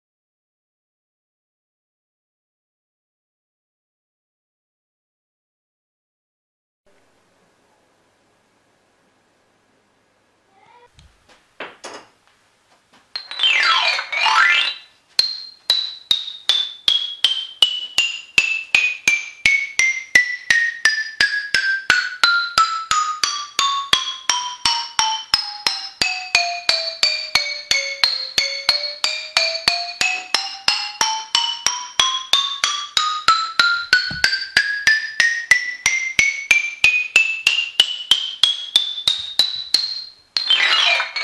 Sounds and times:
Glockenspiel: 0:13.1 - 0:41.2
Marimba, xylophone: 0:13.1 - 0:41.2.

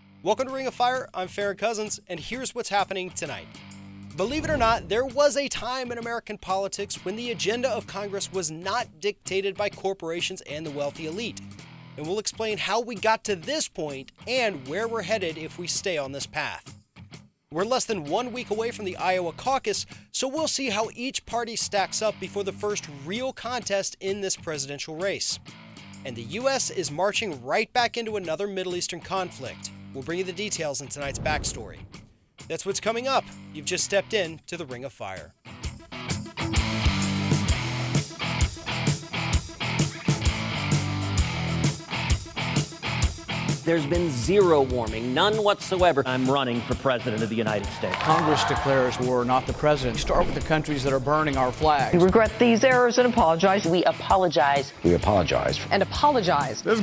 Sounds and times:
Music: 0:00.0 - 0:56.8
Male speech, man speaking: 0:00.2 - 0:03.4, 0:04.2 - 0:11.4, 0:12.0 - 0:16.6, 0:17.5 - 0:25.4, 0:26.0 - 0:31.9, 0:32.5 - 0:35.3, 0:43.6 - 0:52.7, 0:54.8 - 0:55.7, 0:56.6 - 0:56.8.

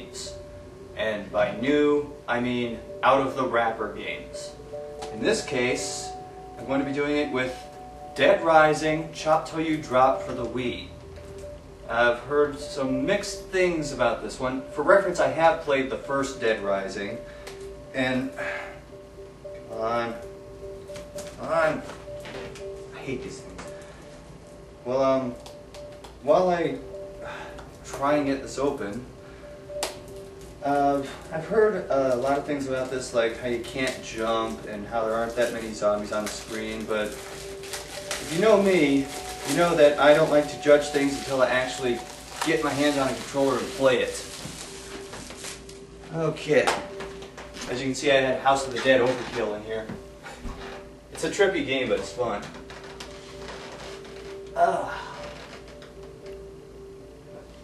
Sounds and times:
Music: 0:00.0 - 0:57.6.

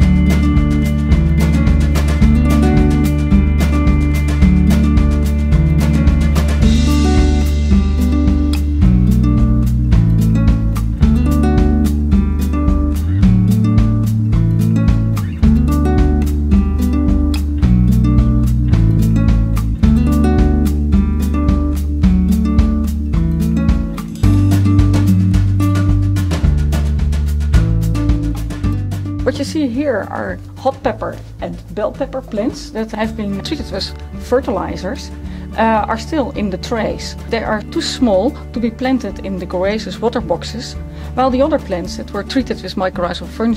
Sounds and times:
Music: 0:00.0 - 0:43.5
Speech: 0:29.2 - 0:43.5.

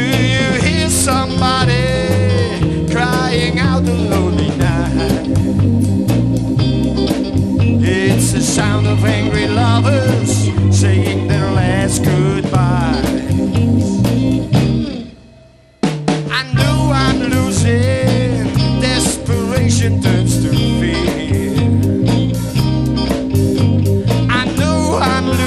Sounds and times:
Blues: 0:00.0 - 0:25.4
Drum: 0:00.0 - 0:25.4.

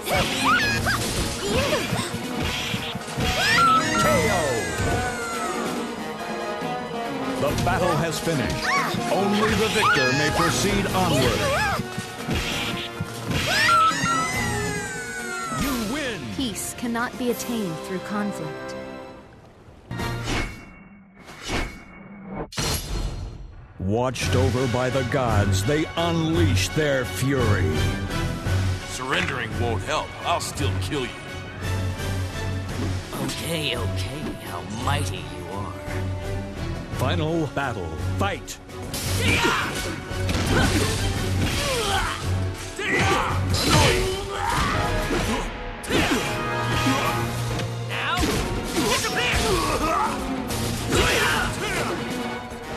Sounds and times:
Music: 0:00.0 - 0:20.8, 0:22.8 - 0:52.7.

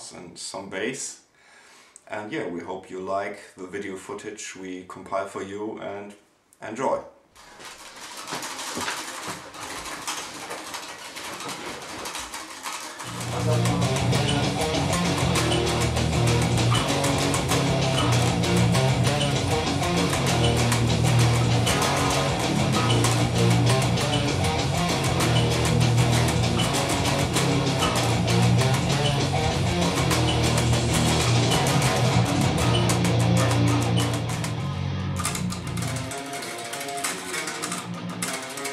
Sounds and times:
Music: 0:12.6 - 0:38.7.

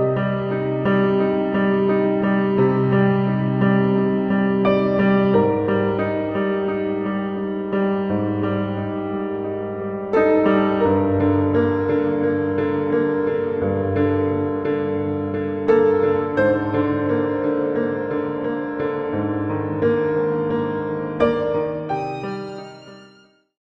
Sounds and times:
Music: 0:00.0 - 0:23.6.

